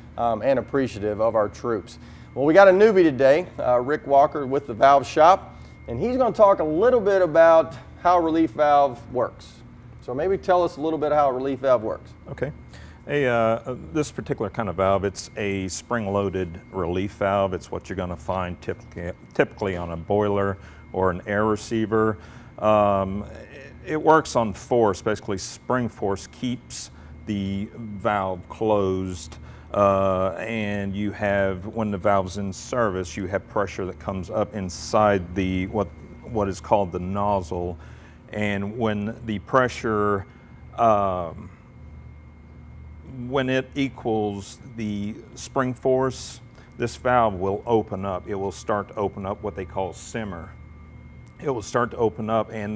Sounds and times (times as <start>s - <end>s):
Speech: 0.2s - 40.2s, 40.8s - 41.5s, 43.1s - 50.6s, 51.4s - 52.7s.